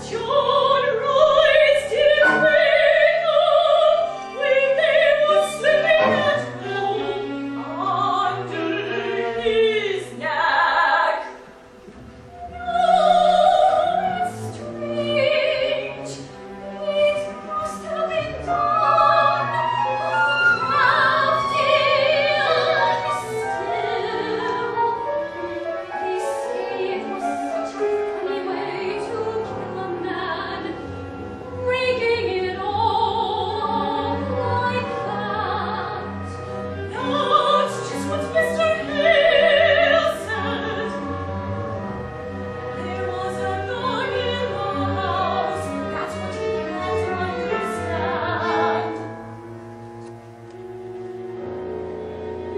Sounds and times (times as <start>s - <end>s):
Opera: 0.0s - 52.5s.